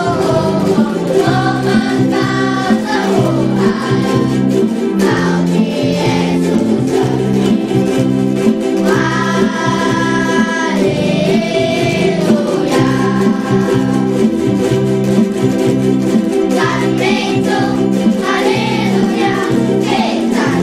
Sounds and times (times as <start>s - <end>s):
Music: 0.0s - 20.6s.